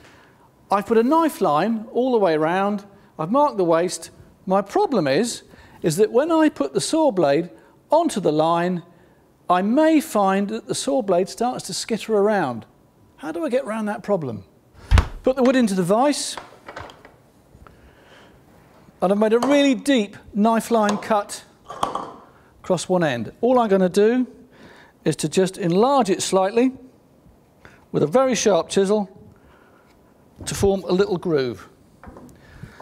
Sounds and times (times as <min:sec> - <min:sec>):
Speech: 0:00.7 - 0:08.9, 0:09.5 - 0:14.6, 0:15.2 - 0:16.4, 0:19.0 - 0:21.6, 0:22.6 - 0:24.4, 0:25.0 - 0:26.9, 0:27.9 - 0:29.2, 0:30.4 - 0:31.8.